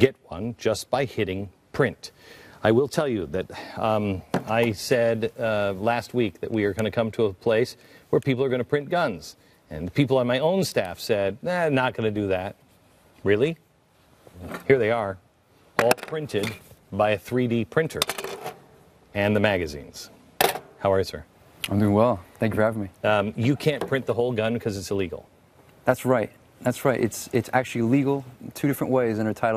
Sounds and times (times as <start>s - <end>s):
Speech: 0.0s - 12.6s, 15.8s - 18.0s, 25.9s - 29.5s.